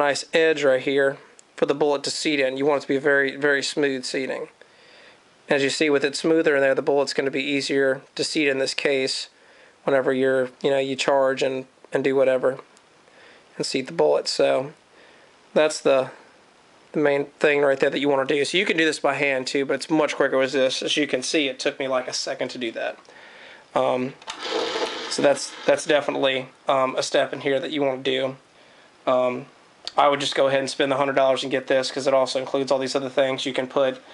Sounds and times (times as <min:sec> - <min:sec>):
Speech: 0:00.0 - 0:04.6, 0:05.5 - 0:12.7, 0:13.6 - 0:14.8, 0:15.6 - 0:16.3, 0:16.9 - 0:23.0, 0:23.8 - 0:24.2, 0:25.1 - 0:28.5, 0:29.1 - 0:34.1
Inside, small room: 0:00.0 - 0:34.1.